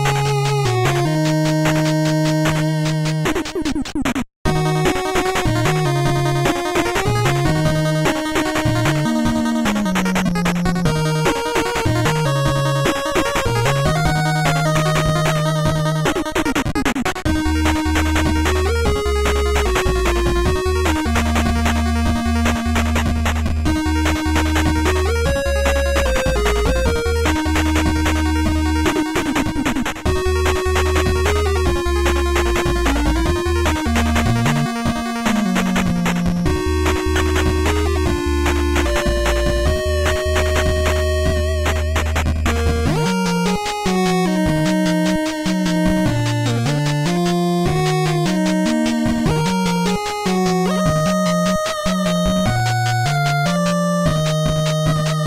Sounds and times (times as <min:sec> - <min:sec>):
Rock and roll: 0:04.5 - 0:55.2.